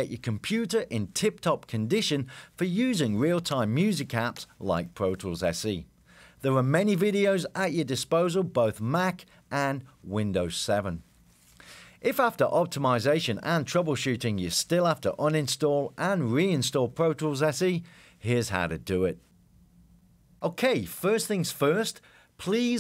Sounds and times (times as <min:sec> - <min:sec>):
Speech: 0:00.0 - 0:11.0, 0:12.0 - 0:19.2, 0:20.4 - 0:22.8.